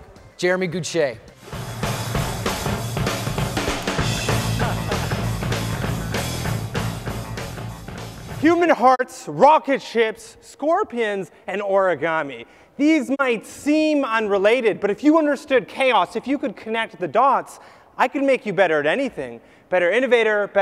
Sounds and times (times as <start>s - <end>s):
Music: 0.0s - 8.8s
Narration, monologue: 0.2s - 1.5s, 8.3s - 20.6s
Male speech, man speaking: 0.4s - 1.3s, 8.4s - 20.6s.